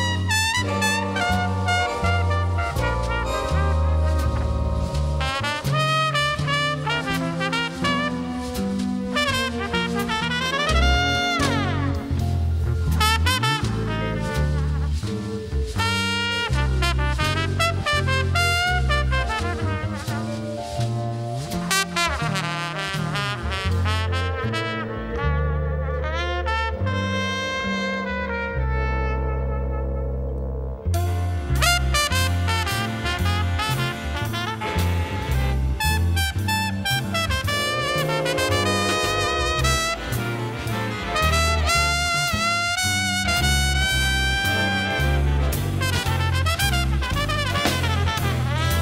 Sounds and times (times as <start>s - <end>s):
Orchestra: 0.0s - 48.8s
Trumpet: 0.0s - 48.8s.